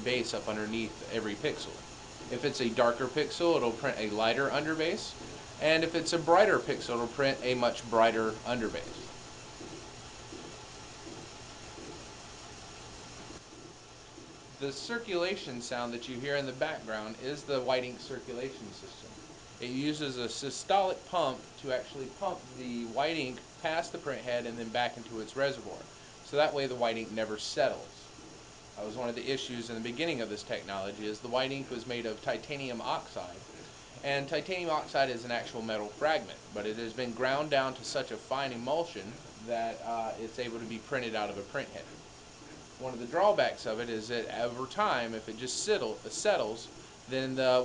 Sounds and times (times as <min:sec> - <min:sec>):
Speech: 0:00.0 - 0:09.1, 0:14.6 - 0:28.1, 0:28.8 - 0:42.0, 0:42.8 - 0:47.6.